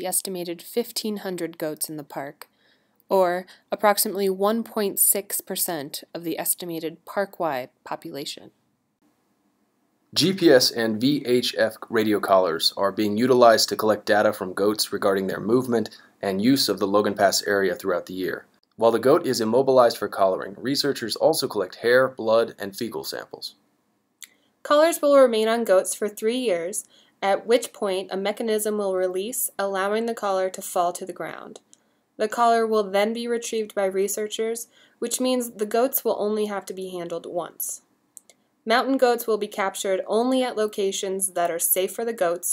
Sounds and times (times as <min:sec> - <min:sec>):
Speech: 0:00.0 - 0:02.5, 0:03.1 - 0:08.6, 0:10.2 - 0:23.6, 0:24.7 - 0:31.6, 0:32.2 - 0:37.8, 0:38.7 - 0:42.5.